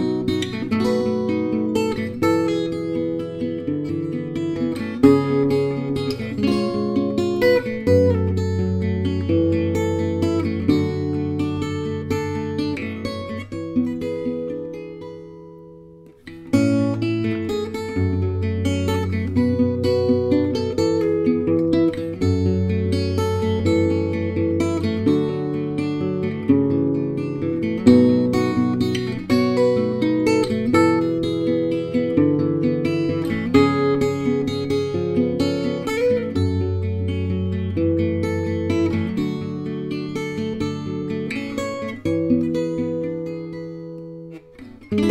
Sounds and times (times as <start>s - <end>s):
Music: 0.0s - 45.1s.